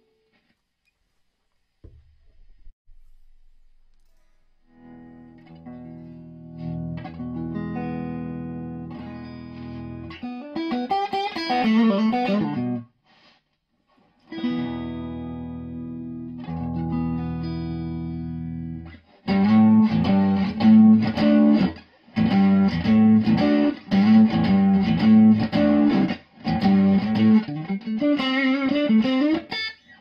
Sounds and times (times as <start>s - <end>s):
Inside, small room: 0.0s - 30.0s
Guitar: 3.9s - 30.0s.